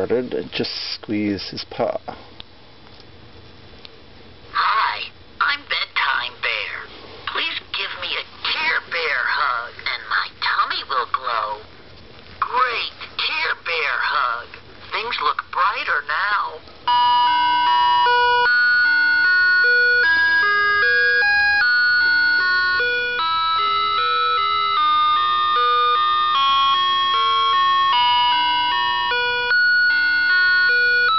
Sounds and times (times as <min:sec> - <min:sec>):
Speech: 0:00.0 - 0:02.2, 0:04.6 - 0:11.7, 0:12.4 - 0:16.6.